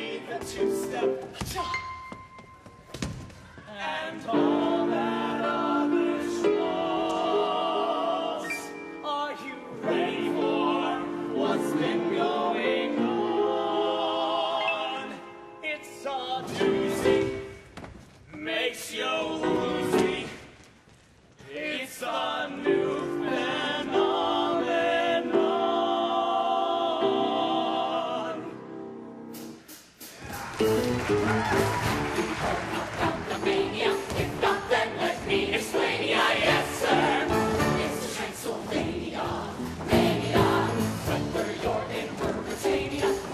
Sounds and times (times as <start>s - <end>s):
Music: 0.0s - 43.3s.